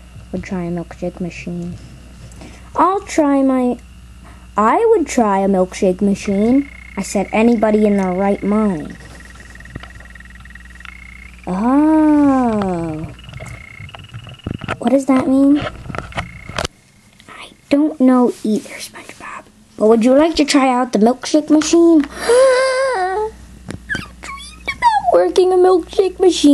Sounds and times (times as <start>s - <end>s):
Speech: 0.3s - 1.8s, 2.8s - 3.8s, 4.6s - 9.0s, 11.5s - 13.1s, 14.8s - 15.6s, 17.3s - 22.1s, 24.3s - 26.5s.